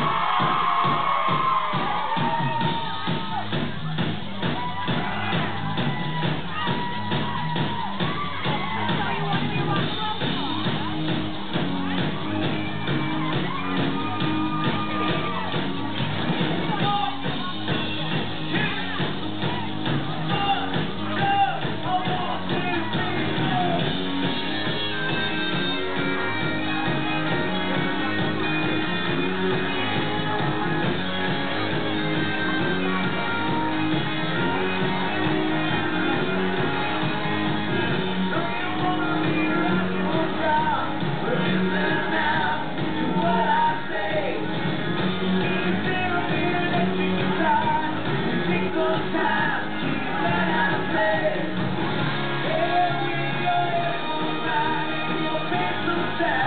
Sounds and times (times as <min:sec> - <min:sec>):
Rock and roll: 0:00.0 - 0:56.4.